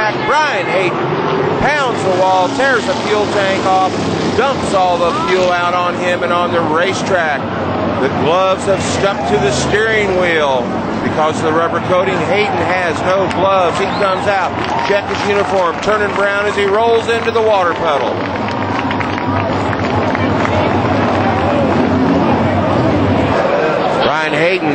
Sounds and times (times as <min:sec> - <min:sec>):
Speech: 0:00.0 - 0:01.0, 0:01.6 - 0:07.4, 0:08.0 - 0:18.2, 0:23.4 - 0:24.7.